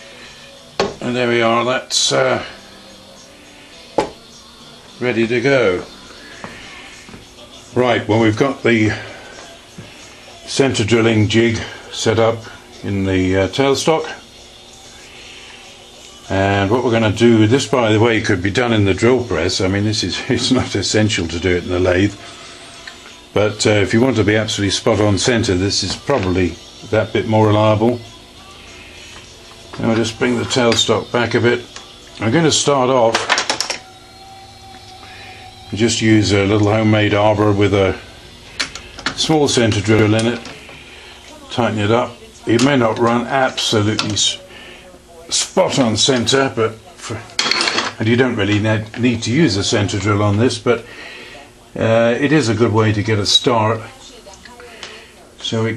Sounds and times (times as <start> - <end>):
Speech: 1.0 - 2.6, 5.0 - 5.9, 7.4 - 9.4, 10.5 - 14.3, 16.3 - 22.2, 23.4 - 28.1, 29.8 - 33.3, 35.7 - 38.1, 39.2 - 55.7.